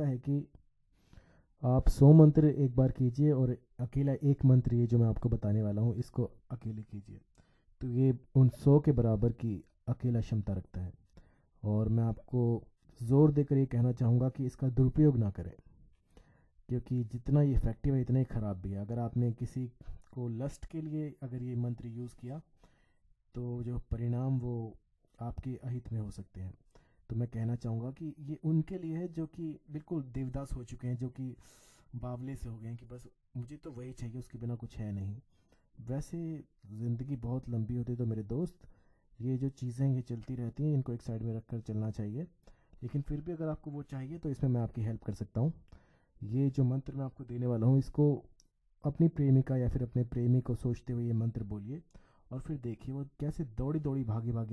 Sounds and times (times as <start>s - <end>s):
Speech: 0.0s - 0.6s, 1.6s - 11.0s, 11.6s - 15.7s, 16.7s - 22.5s, 23.3s - 54.5s.